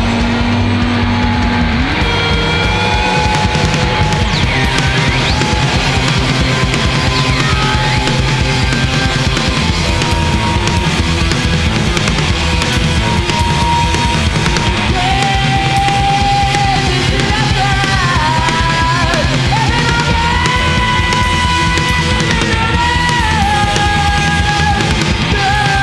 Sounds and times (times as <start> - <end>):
Bass guitar: 0.0 - 25.8
Punk rock: 0.0 - 25.8
Singing: 13.1 - 25.8.